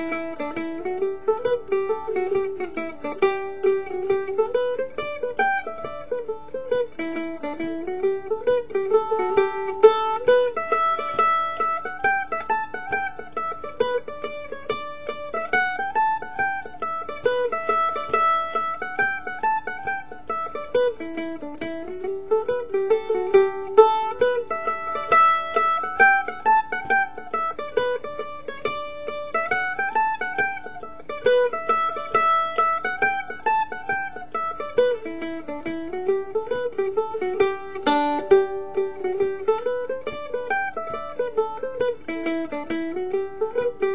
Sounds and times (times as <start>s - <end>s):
Mandolin: 0.0s - 43.9s.